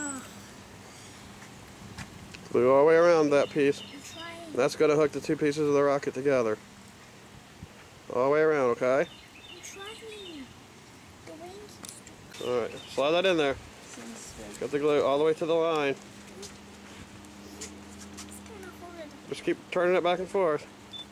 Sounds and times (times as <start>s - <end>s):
Outside, rural or natural: 0.0s - 21.1s
Child speech, kid speaking: 3.8s - 4.8s, 9.6s - 10.6s, 11.2s - 12.6s, 13.9s - 14.6s, 18.3s - 19.2s.